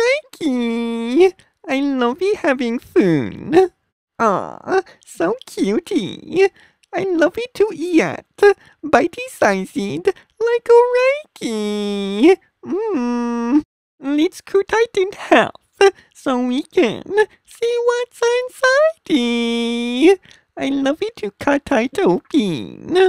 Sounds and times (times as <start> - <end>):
Speech: 0.0 - 23.0.